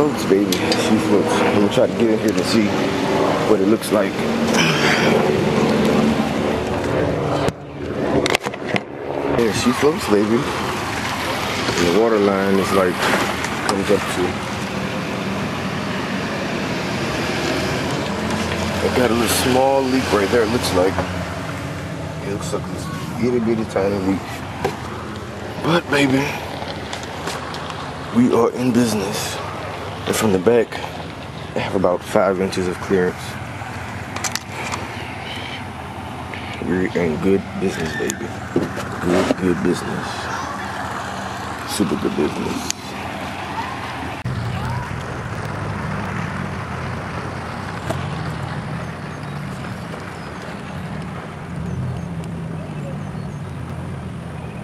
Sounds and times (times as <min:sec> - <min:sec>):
Speech: 0:00.0 - 0:02.8, 0:03.5 - 0:04.2, 0:09.4 - 0:10.5, 0:11.8 - 0:13.1, 0:13.7 - 0:14.4, 0:18.8 - 0:21.1, 0:22.2 - 0:24.2, 0:25.6 - 0:26.4, 0:28.2 - 0:29.4, 0:30.1 - 0:30.9, 0:31.6 - 0:33.4, 0:36.6 - 0:38.3, 0:39.0 - 0:40.6, 0:41.7 - 0:43.0
Boat, Water vehicle: 0:00.0 - 0:54.6
Outside, rural or natural: 0:00.0 - 0:54.6.